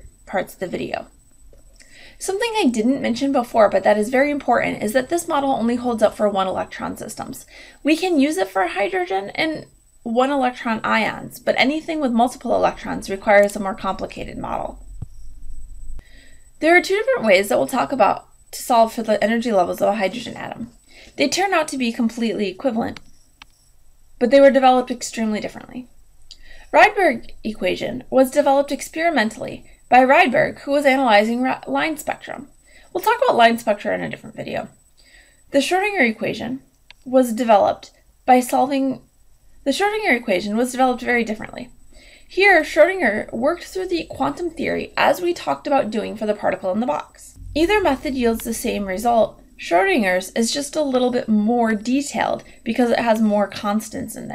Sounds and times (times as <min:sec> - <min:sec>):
Speech: 0:00.0 - 0:01.1, 0:02.2 - 0:14.8, 0:16.6 - 0:23.0, 0:24.2 - 0:25.9, 0:26.7 - 0:34.8, 0:35.5 - 0:39.0, 0:39.7 - 0:41.7, 0:42.3 - 0:54.3.